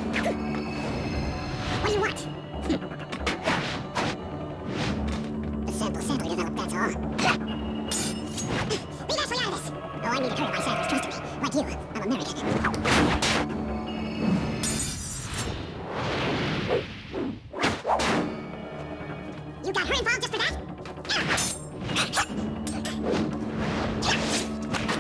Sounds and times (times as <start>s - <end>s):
Music: 0.0s - 25.0s
Speech: 5.7s - 7.4s, 8.7s - 12.6s, 19.6s - 20.6s.